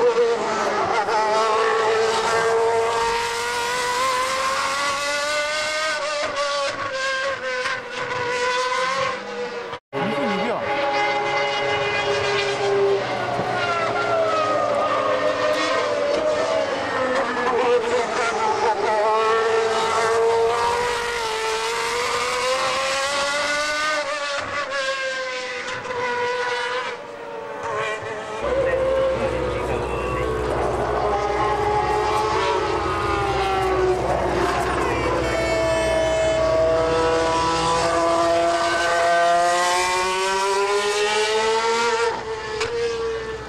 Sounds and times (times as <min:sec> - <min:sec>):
Speech: 0:10.0 - 0:10.8, 0:28.4 - 0:30.5.